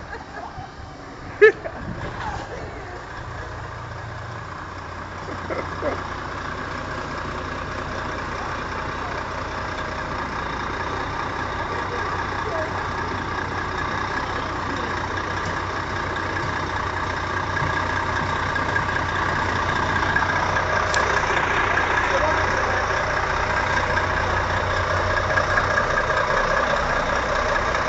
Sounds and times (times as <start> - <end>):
Vehicle: 0.0 - 27.8.